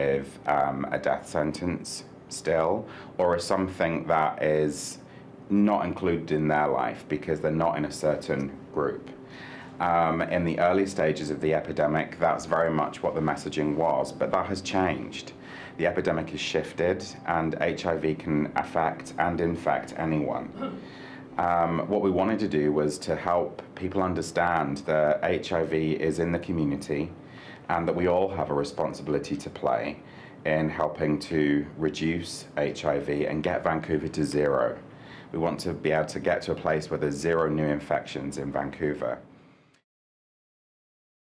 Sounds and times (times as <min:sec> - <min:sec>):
Speech: 0:00.0 - 0:09.2, 0:09.8 - 0:20.8, 0:21.4 - 0:39.2.